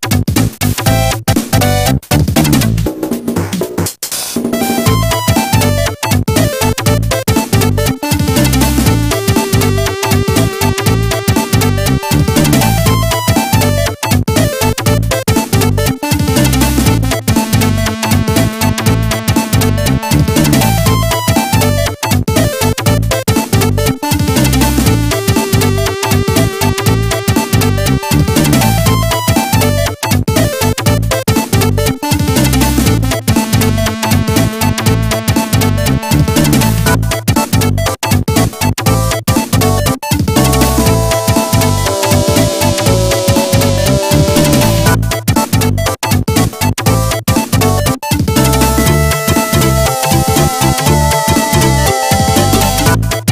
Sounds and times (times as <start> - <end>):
Soundtrack music: 4.5 - 14.6, 15.6 - 21.9, 40.4 - 45.1, 48.4 - 53.2.